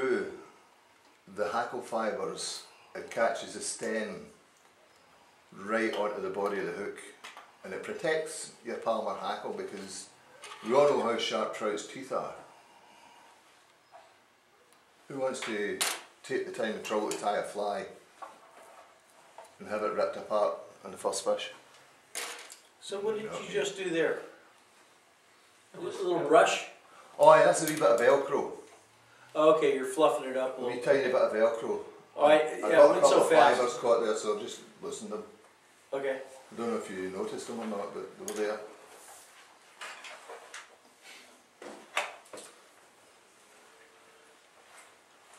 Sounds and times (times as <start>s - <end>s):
Inside, small room: 0.0s - 45.3s
Speech: 1.3s - 4.4s, 5.6s - 12.5s, 15.1s - 18.0s, 19.6s - 21.6s, 25.8s - 28.7s, 29.4s - 38.8s.